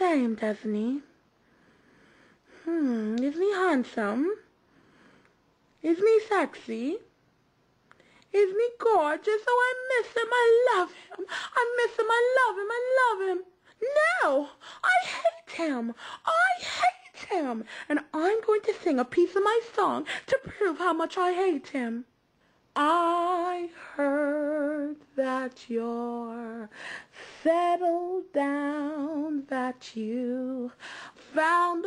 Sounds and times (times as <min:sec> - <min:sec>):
Speech: 0:00.0 - 0:01.2, 0:02.7 - 0:04.5, 0:05.8 - 0:07.1, 0:08.4 - 0:11.0, 0:11.6 - 0:22.1.